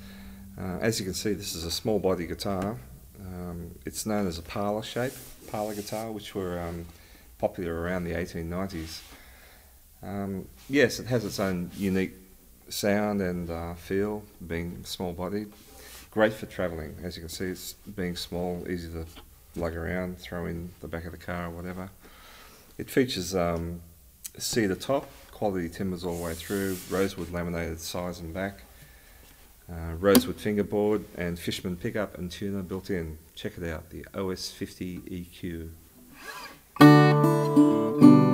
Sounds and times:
Speech: 0:00.0 - 0:09.1, 0:10.0 - 0:22.0, 0:22.8 - 0:28.7, 0:29.7 - 0:35.8.

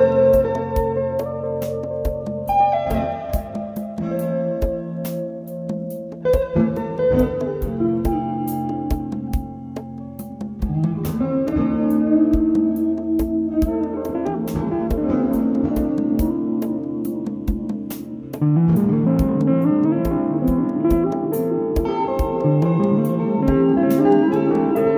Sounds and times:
Music: 0:00.0 - 0:24.9.

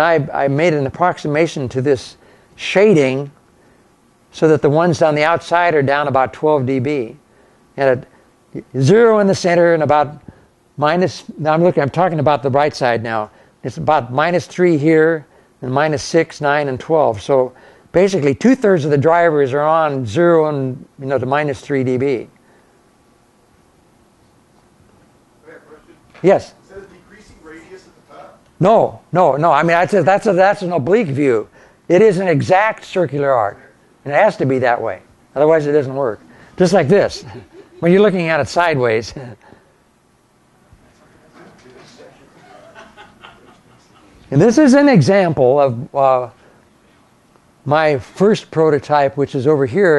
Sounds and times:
Male speech, man speaking: 0:00.0 - 0:03.3, 0:04.4 - 0:07.2, 0:07.8 - 0:10.2, 0:10.8 - 0:22.3, 0:25.4 - 0:39.4, 0:40.9 - 0:42.5, 0:44.3 - 0:46.4, 0:47.7 - 0:49.9.

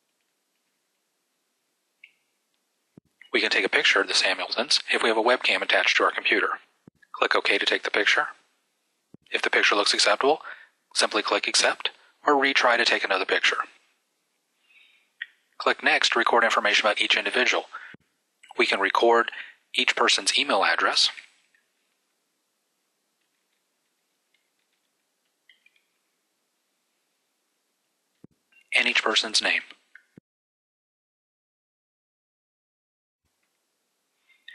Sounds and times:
Speech: 0:03.3 - 0:08.4, 0:09.3 - 0:13.8, 0:15.6 - 0:21.2, 0:28.8 - 0:29.8.

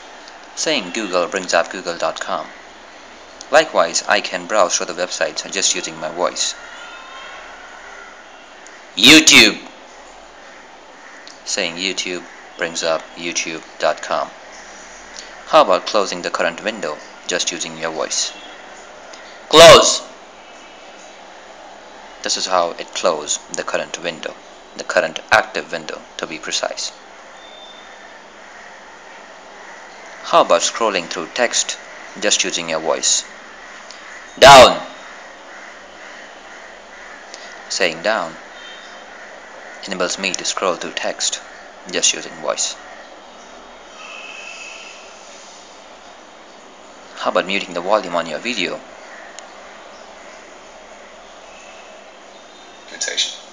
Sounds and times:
Male speech, man speaking: 0:00.6 - 0:02.5, 0:03.5 - 0:06.6, 0:09.0 - 0:09.7, 0:11.4 - 0:14.3, 0:15.5 - 0:18.4, 0:19.5 - 0:20.1, 0:22.2 - 0:27.0, 0:30.3 - 0:33.3, 0:34.4 - 0:34.9, 0:37.7 - 0:38.4, 0:39.8 - 0:42.8, 0:47.2 - 0:48.8, 0:52.9 - 0:53.4.

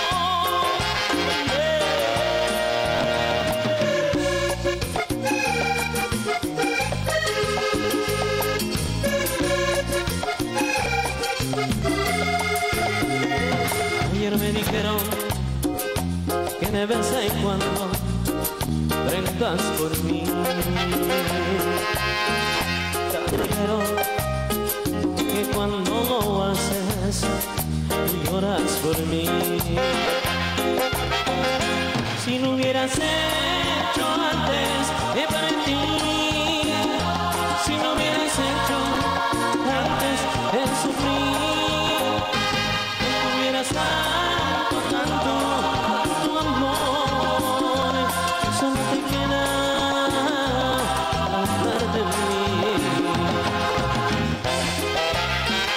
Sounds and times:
Music: 0:00.0 - 0:55.7.

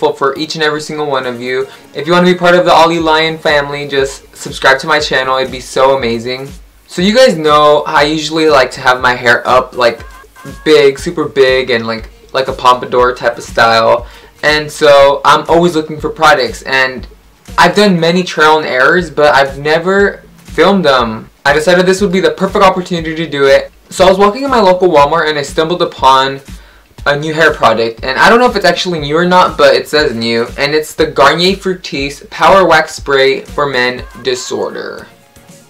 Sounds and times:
Speech: 0:00.0 - 0:35.1
Music: 0:00.0 - 0:35.6.

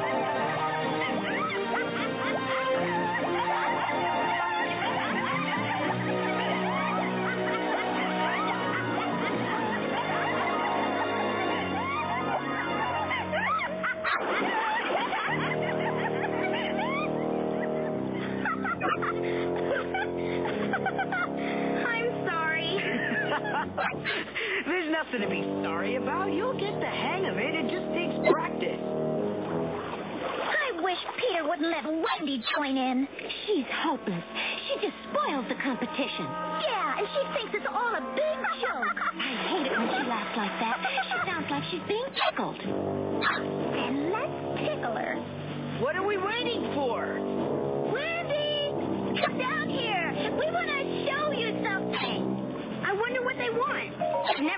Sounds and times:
Snicker: 0:00.0 - 0:21.4, 0:22.7 - 0:24.8, 0:38.2 - 0:41.6
Speech: 0:24.7 - 0:28.8, 0:45.8 - 0:47.2, 0:47.9 - 0:52.2, 0:52.8 - 0:54.5.

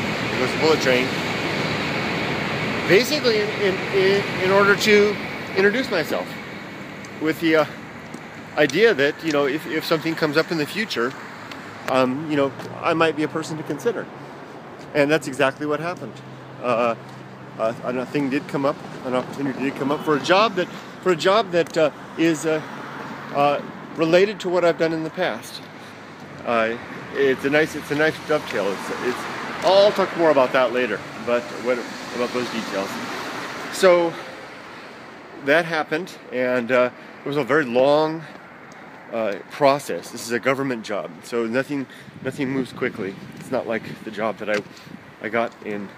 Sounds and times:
Speech: 0:00.4 - 0:01.1, 0:02.9 - 0:06.4, 0:07.2 - 0:07.8, 0:08.6 - 0:11.2, 0:11.9 - 0:14.1, 0:14.9 - 0:17.0, 0:17.6 - 0:22.7, 0:23.3 - 0:25.7, 0:26.4 - 0:33.1, 0:33.7 - 0:34.3, 0:35.4 - 0:38.3, 0:39.1 - 0:45.9.

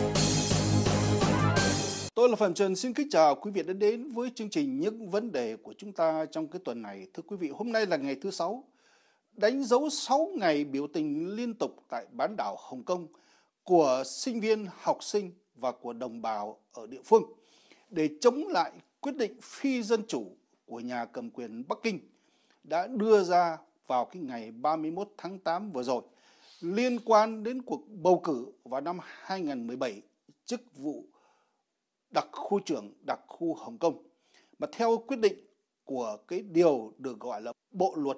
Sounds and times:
Speech: 0:02.2 - 0:08.7, 0:09.4 - 0:22.1, 0:22.7 - 0:31.1, 0:32.1 - 0:34.0, 0:34.6 - 0:38.1.

